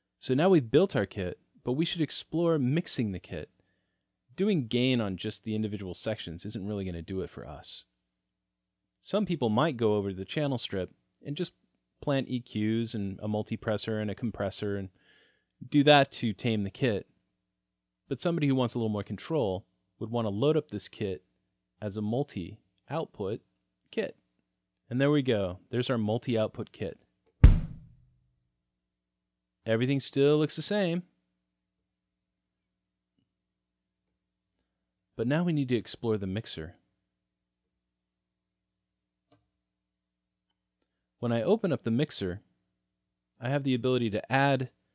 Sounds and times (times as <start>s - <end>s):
Speech: 0.2s - 3.5s, 4.4s - 7.9s, 9.0s - 14.9s, 15.6s - 17.1s, 18.1s - 21.2s, 21.8s - 24.2s, 24.9s - 27.0s, 29.7s - 31.1s, 35.2s - 36.8s, 41.2s - 42.4s, 43.4s - 44.7s
Bass drum: 27.4s - 28.0s.